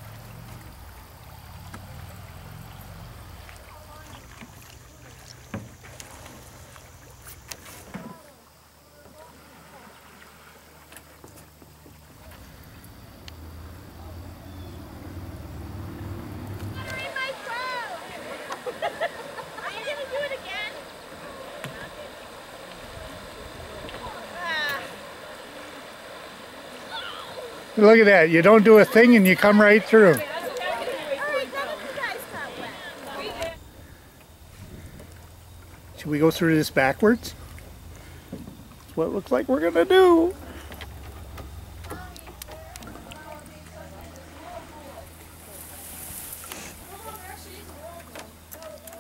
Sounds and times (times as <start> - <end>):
Vehicle: 0.0 - 7.9, 10.3 - 21.2, 21.8 - 49.0.